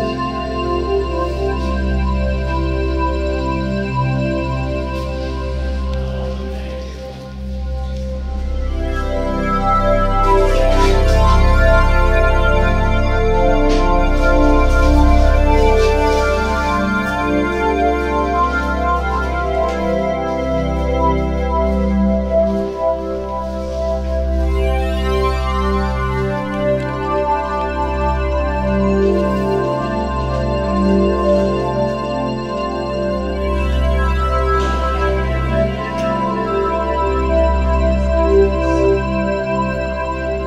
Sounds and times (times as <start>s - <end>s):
Music: 0.0s - 40.4s.